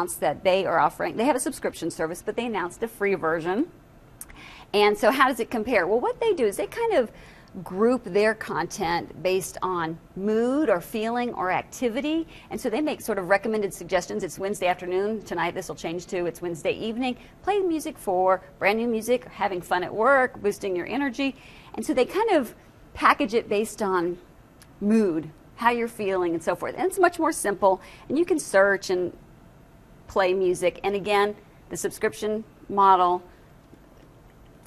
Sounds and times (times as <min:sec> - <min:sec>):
Speech: 0:00.0 - 0:03.7, 0:04.8 - 0:24.2, 0:24.8 - 0:29.2, 0:30.1 - 0:33.3.